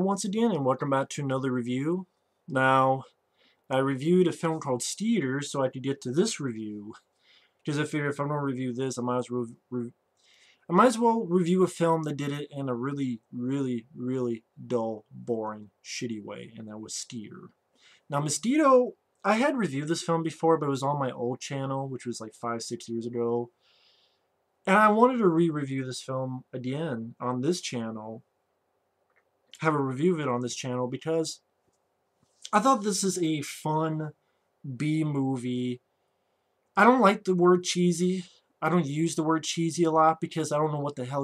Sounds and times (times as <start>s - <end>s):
Speech: 0.0s - 7.1s, 7.7s - 10.0s, 10.7s - 23.6s, 24.7s - 28.2s, 29.6s - 31.4s, 32.4s - 35.8s, 36.8s - 41.2s.